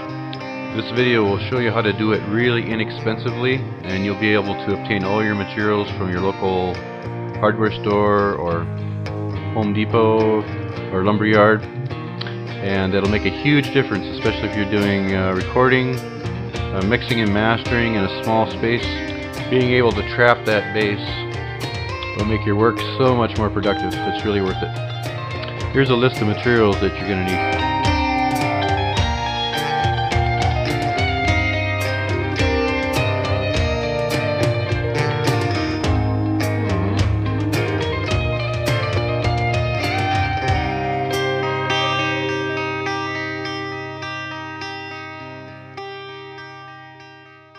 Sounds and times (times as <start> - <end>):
Distortion: 0.0 - 47.5
Electric guitar: 0.0 - 47.5.